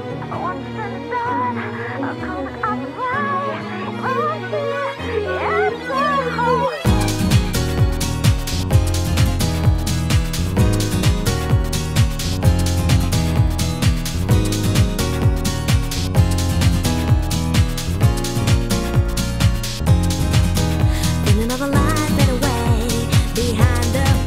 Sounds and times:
Music: 0.0 - 24.2.

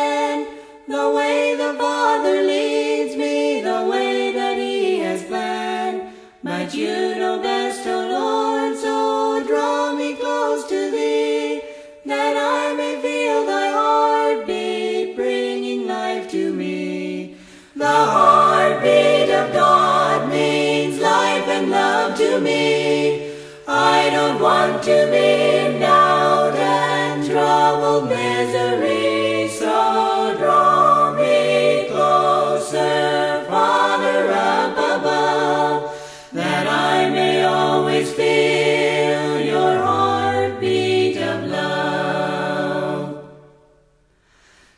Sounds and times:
Music: 0.0 - 44.7.

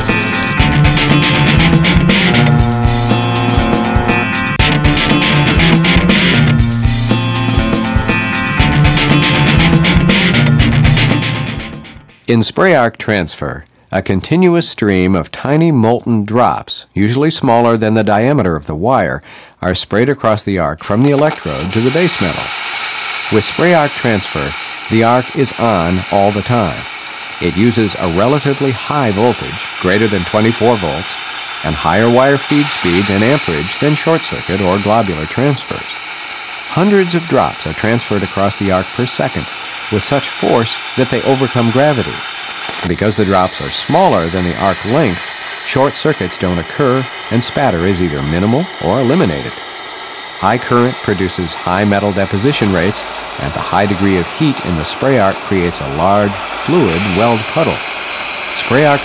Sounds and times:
Speech: 12.3 - 22.5, 23.3 - 36.0, 36.7 - 42.2, 42.8 - 49.6, 50.4 - 57.8, 58.6 - 59.0.

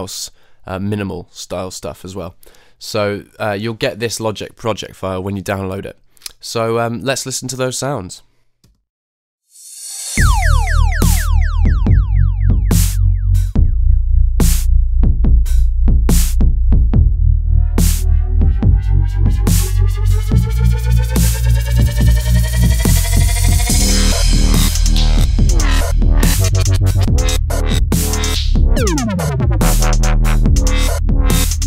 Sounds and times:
Dubstep: 10.2 - 13.6, 17.8 - 31.6
Drum machine: 10.2 - 17.2, 17.8 - 31.6.

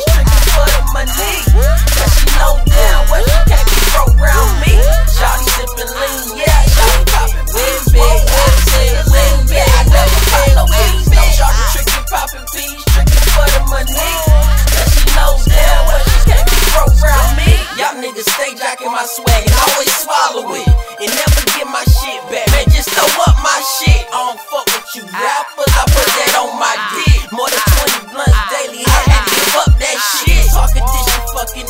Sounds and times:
Disco: 0.0 - 31.6
Rhythm and blues: 0.0 - 31.6.

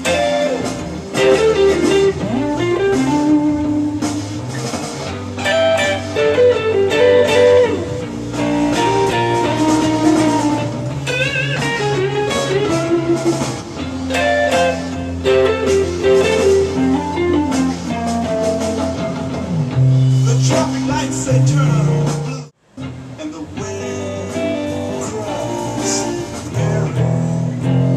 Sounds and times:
Electric guitar: 0.0 - 27.9.

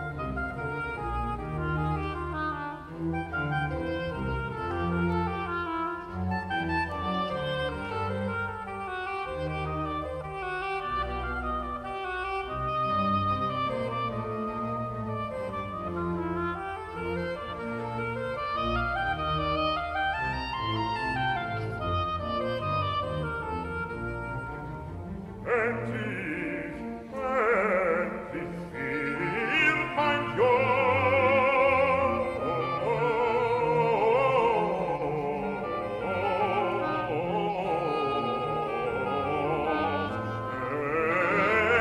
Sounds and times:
Clarinet: 0.0 - 41.8.

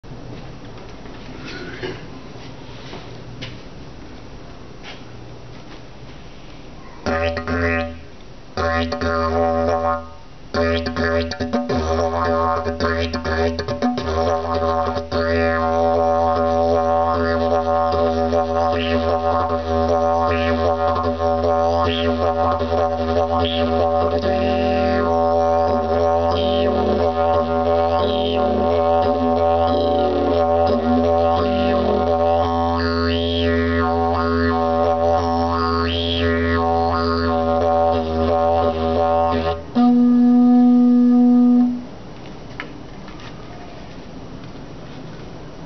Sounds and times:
Didgeridoo: 6.8 - 41.9.

